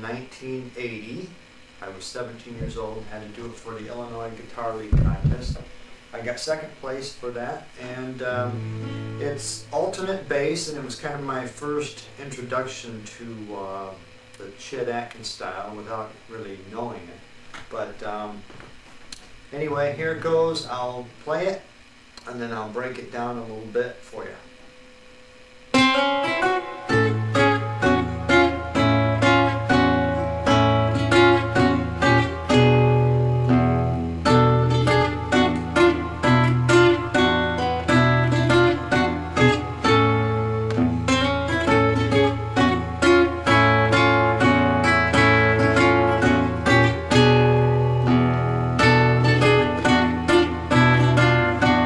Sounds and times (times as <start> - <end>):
Speech: 0.0 - 8.6, 9.2 - 18.4, 19.5 - 24.5
Music: 8.2 - 10.8, 24.5 - 51.8.